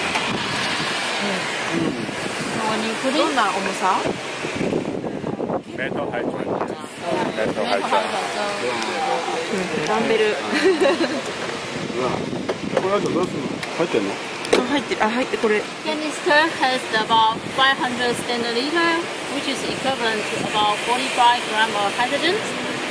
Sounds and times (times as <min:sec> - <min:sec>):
Outside, urban or manmade: 0:00.0 - 0:22.9.